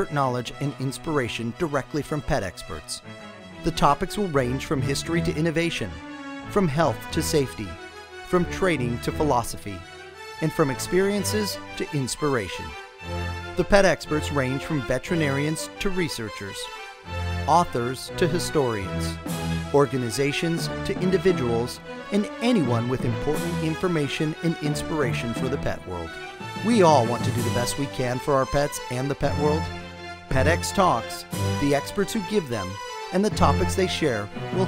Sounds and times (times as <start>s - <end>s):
Speech: 0.0s - 3.0s, 3.6s - 9.8s, 10.4s - 12.8s, 13.6s - 16.7s, 17.5s - 19.2s, 19.8s - 29.7s, 30.3s - 34.6s
Music: 0.0s - 34.6s.